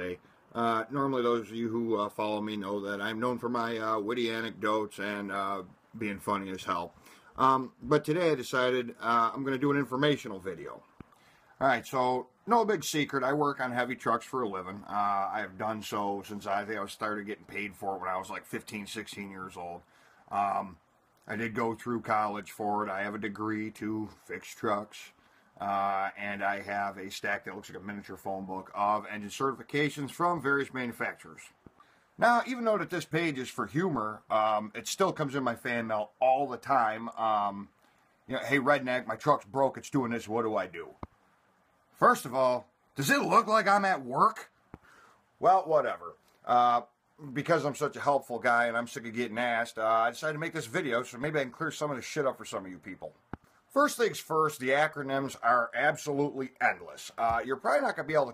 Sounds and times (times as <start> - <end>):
Speech: 0.0 - 10.9, 11.6 - 31.6, 32.2 - 37.7, 38.3 - 41.1, 42.0 - 44.5, 45.4 - 58.3.